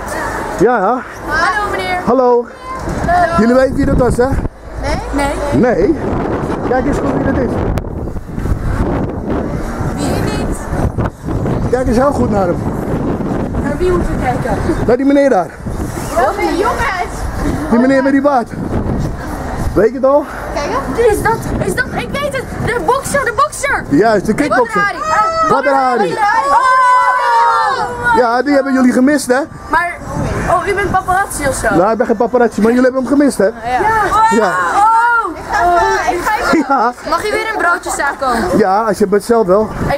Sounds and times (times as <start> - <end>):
Vehicle: 0.0 - 39.9.